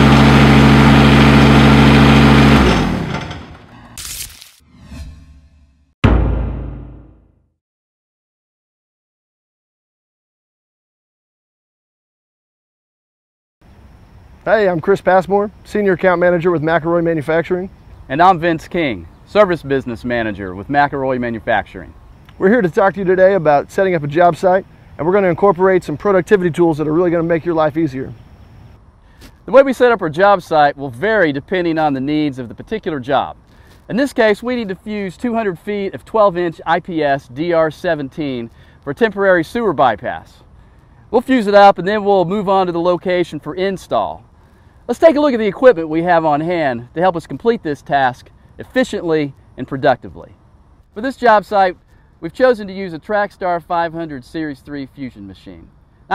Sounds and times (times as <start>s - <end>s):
Speech: 14.5s - 28.2s, 29.5s - 40.4s, 41.1s - 44.2s, 44.9s - 50.4s, 51.0s - 56.1s.